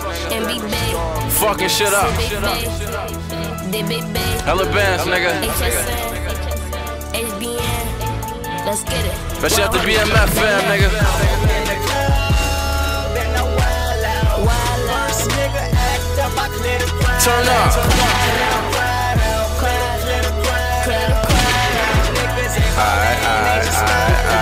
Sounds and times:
Music: 0.0s - 24.4s.

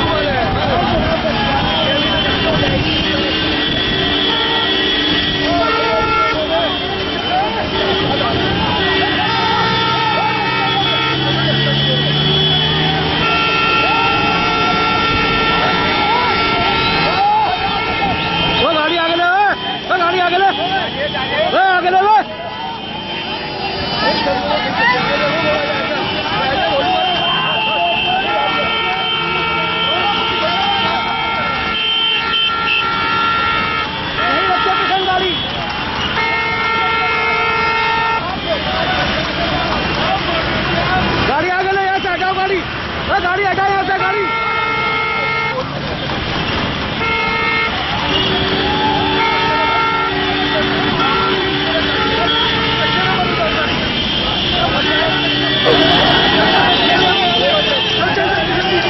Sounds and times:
Speech: 0.0s - 3.5s, 5.5s - 31.7s, 34.2s - 35.5s, 36.6s - 45.9s, 49.0s - 58.8s.

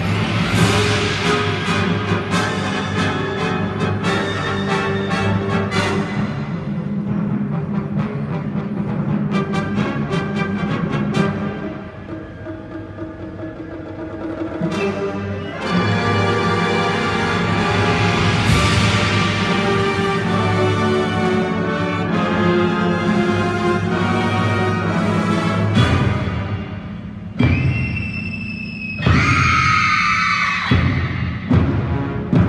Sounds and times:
Music: 0.0s - 32.4s.

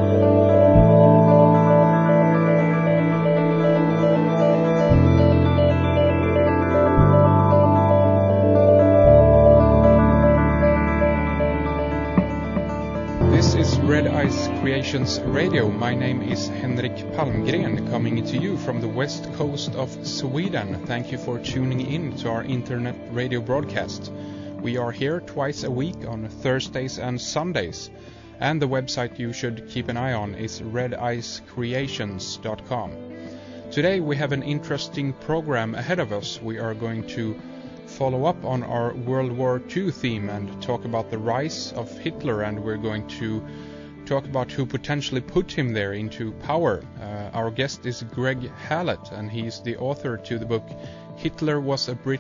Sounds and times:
Music: 0.0s - 52.2s
Speech: 13.2s - 33.0s, 33.7s - 43.5s, 44.1s - 52.2s.

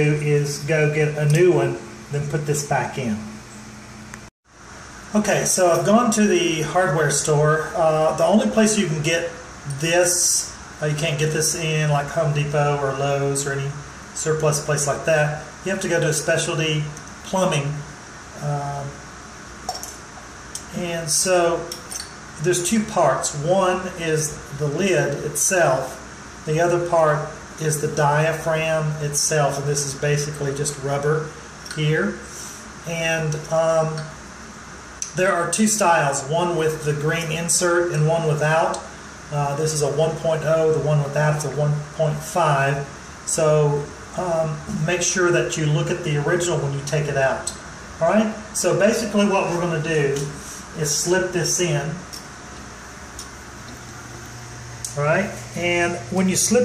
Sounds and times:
Speech: 0.0s - 3.4s, 5.1s - 19.0s, 20.6s - 34.2s, 35.0s - 52.2s, 54.9s - 56.6s.

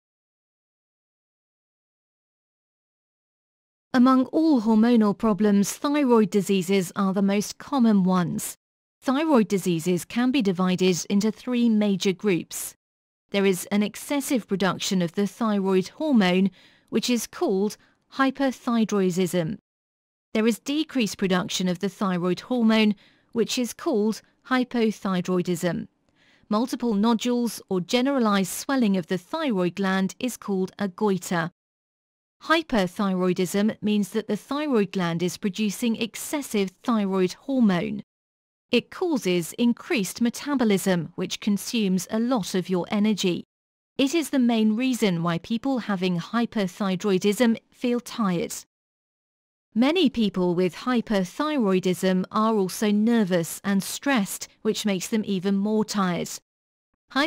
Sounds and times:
Speech: 4.0s - 19.6s, 20.4s - 25.9s, 26.5s - 31.5s, 32.4s - 38.0s, 38.8s - 48.7s, 49.8s - 56.4s.

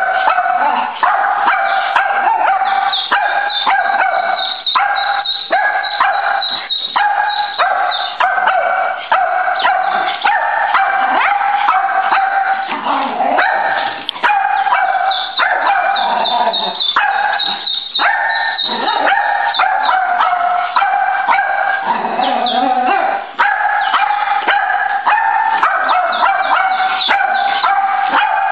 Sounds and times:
Bow-wow: 0.0s - 28.5s.

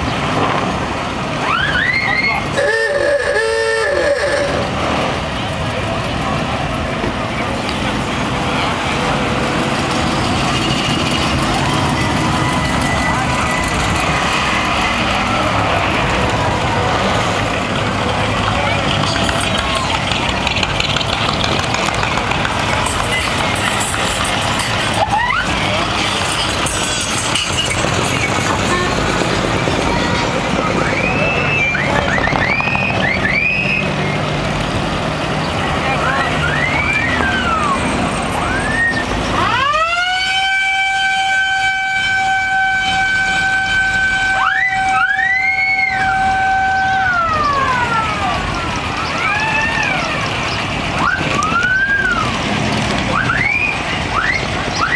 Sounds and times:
Speech: 16.6s - 20.5s, 35.4s - 39.0s.

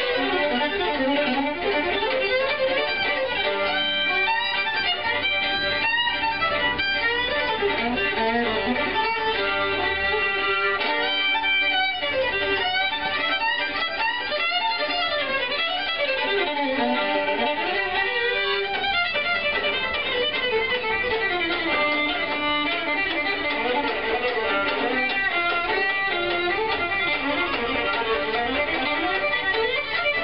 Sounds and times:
Violin, fiddle: 0.0s - 30.2s.

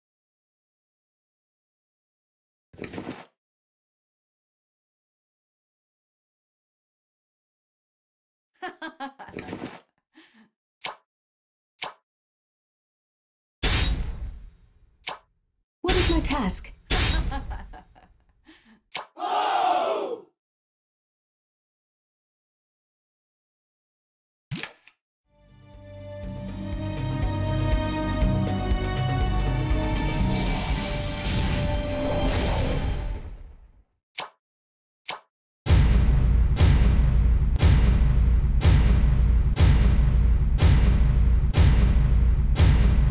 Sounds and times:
Music: 25.3s - 33.3s, 35.7s - 43.1s.

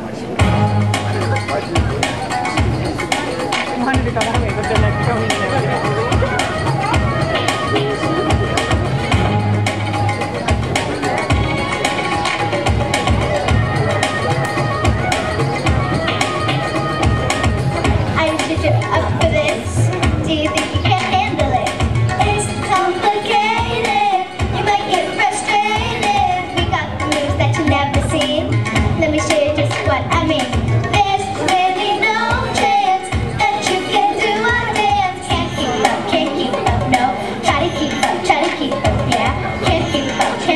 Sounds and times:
Music: 0.0s - 40.5s
Child singing: 11.3s - 40.5s.

